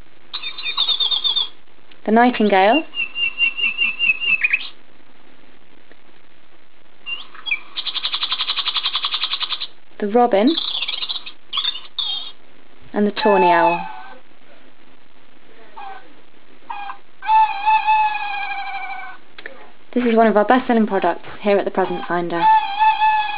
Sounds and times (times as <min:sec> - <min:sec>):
Chirp, tweet: 0:00.4 - 0:01.6, 0:02.9 - 0:04.8, 0:10.6 - 0:12.4
Speech: 0:02.0 - 0:02.9, 0:10.0 - 0:10.6, 0:12.9 - 0:13.9, 0:19.4 - 0:22.6.